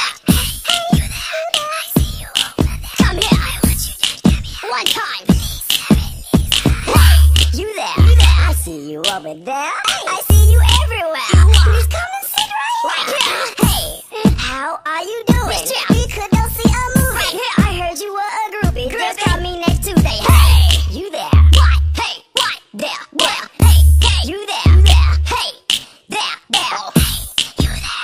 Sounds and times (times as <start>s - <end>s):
Music: 0.0s - 12.6s, 13.3s - 28.0s.